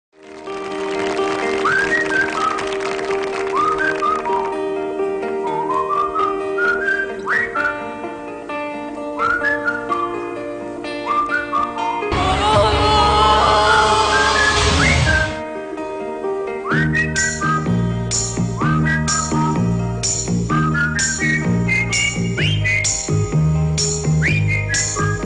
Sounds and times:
Whistling: 0:01.6 - 0:02.7, 0:03.4 - 0:04.6, 0:05.4 - 0:07.9, 0:09.2 - 0:10.3, 0:11.0 - 0:12.1, 0:14.1 - 0:15.4, 0:16.6 - 0:17.7, 0:18.6 - 0:19.6, 0:20.5 - 0:23.0, 0:24.2 - 0:25.2.

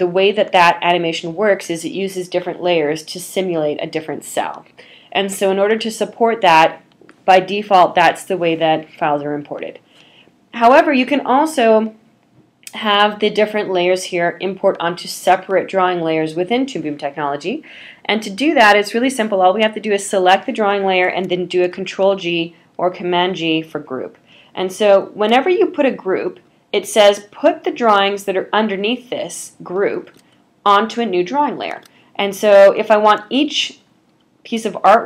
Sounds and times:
Speech: 0:00.0 - 0:09.8, 0:10.6 - 0:12.0, 0:12.7 - 0:33.9, 0:34.5 - 0:35.0.

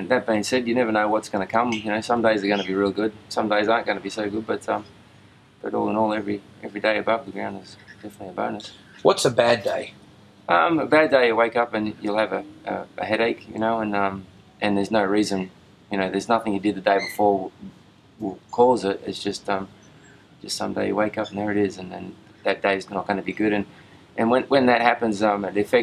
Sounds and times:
Speech: 0:00.0 - 0:04.9, 0:05.6 - 0:09.9, 0:10.5 - 0:19.7, 0:20.4 - 0:25.8.

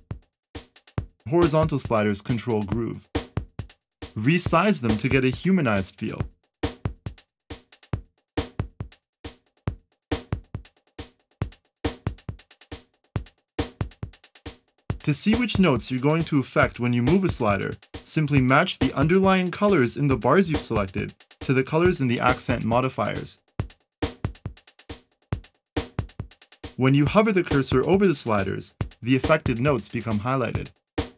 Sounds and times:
Music: 0:00.0 - 0:31.1
Speech: 0:01.3 - 0:03.0, 0:04.2 - 0:06.2, 0:15.0 - 0:23.4, 0:26.8 - 0:30.7.

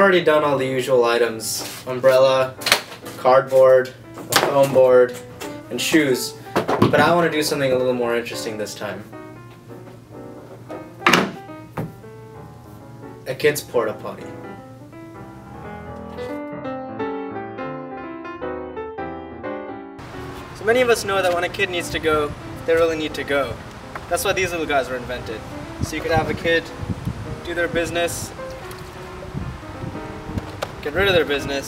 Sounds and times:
Speech: 0:00.0 - 0:02.6, 0:03.2 - 0:09.1, 0:13.2 - 0:14.4, 0:20.6 - 0:26.7, 0:27.4 - 0:28.3, 0:30.8 - 0:31.6
Music: 0:00.0 - 0:31.6.

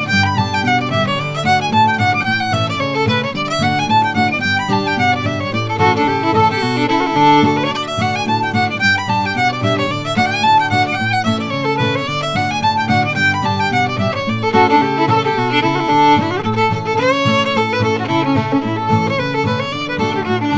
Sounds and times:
Violin, fiddle: 0:00.0 - 0:20.5.

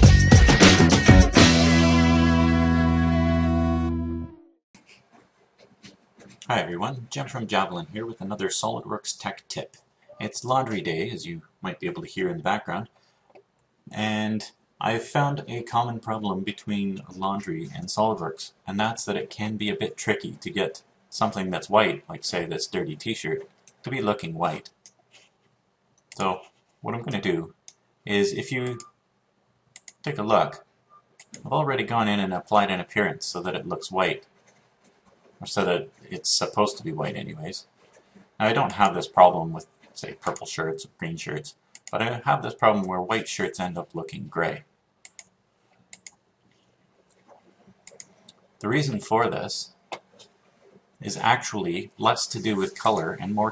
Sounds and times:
Speech: 0:06.4 - 0:12.9, 0:13.9 - 0:24.7, 0:26.2 - 0:28.9, 0:30.0 - 0:30.6, 0:31.4 - 0:34.2, 0:35.4 - 0:37.7, 0:38.4 - 0:44.7, 0:48.6 - 0:49.8, 0:51.0 - 0:53.5.

